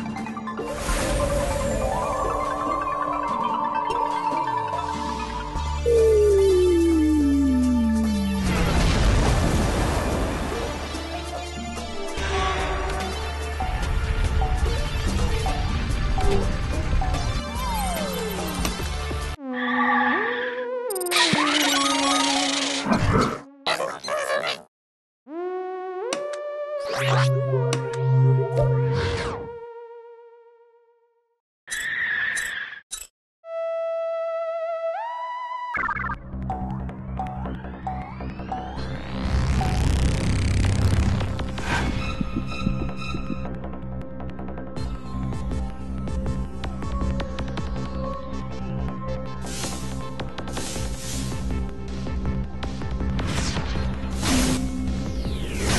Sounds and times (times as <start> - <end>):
Music: 0.0 - 9.2, 10.0 - 19.4, 25.3 - 31.4, 33.4 - 55.7.